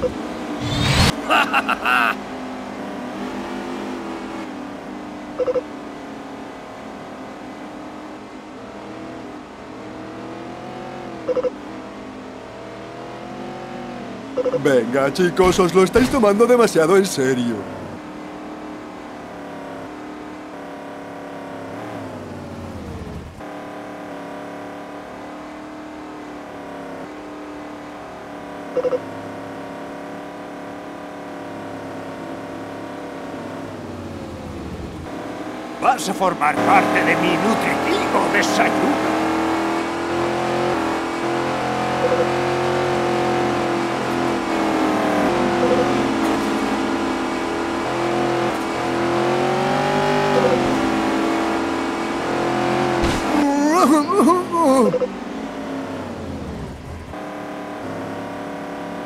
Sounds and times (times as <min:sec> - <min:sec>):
Truck: 0:00.0 - 0:59.0
Speech: 0:14.6 - 0:17.6, 0:35.8 - 0:39.0, 0:53.4 - 0:55.0.